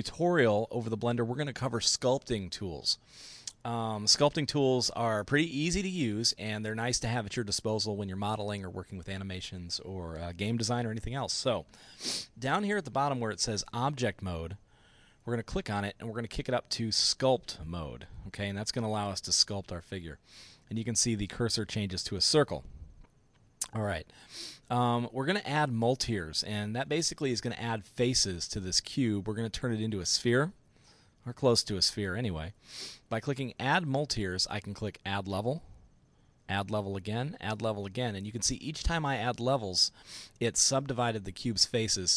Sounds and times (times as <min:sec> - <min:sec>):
Speech: 0:00.0 - 0:11.7, 0:12.4 - 0:14.6, 0:15.3 - 0:22.7, 0:23.6 - 0:24.1, 0:24.7 - 0:30.6, 0:31.2 - 0:35.7, 0:36.5 - 0:42.1.